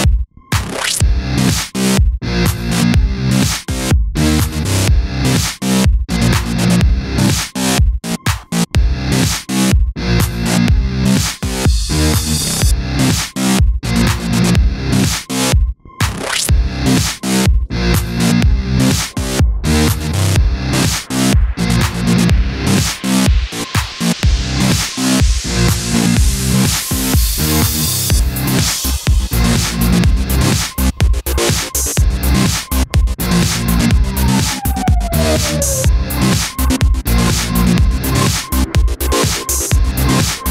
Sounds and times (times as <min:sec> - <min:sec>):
Music: 0:00.0 - 0:40.5.